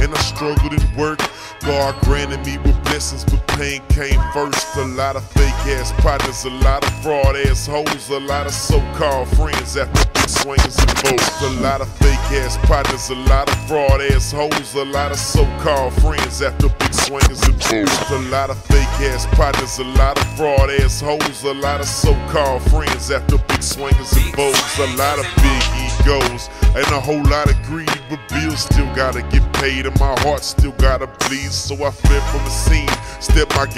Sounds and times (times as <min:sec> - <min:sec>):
Music: 0:00.0 - 0:33.7.